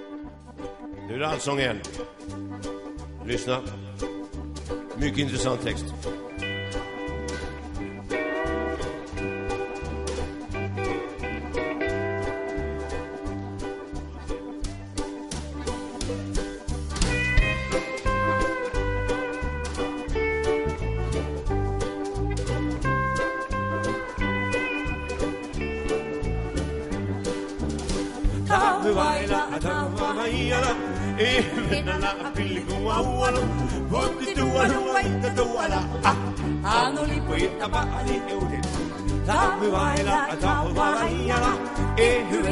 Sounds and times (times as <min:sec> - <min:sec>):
Music: 0:00.0 - 0:42.5.